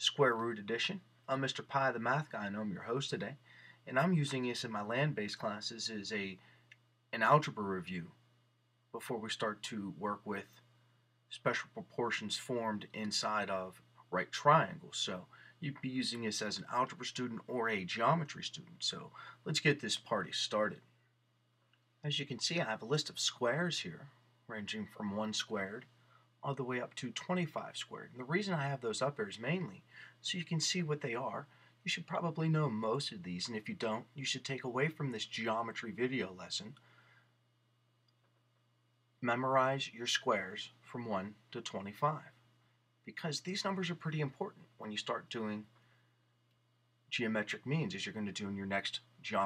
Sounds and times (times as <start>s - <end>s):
Speech: 0.0s - 6.4s, 7.1s - 8.2s, 9.0s - 10.6s, 11.3s - 20.9s, 22.0s - 36.8s, 39.2s - 42.4s, 43.1s - 45.8s, 47.1s - 49.4s.